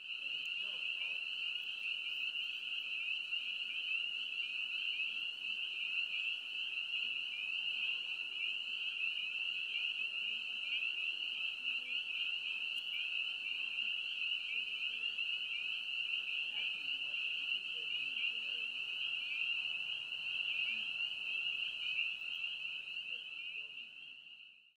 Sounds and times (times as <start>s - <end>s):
Outside, rural or natural: 0.0s - 24.7s.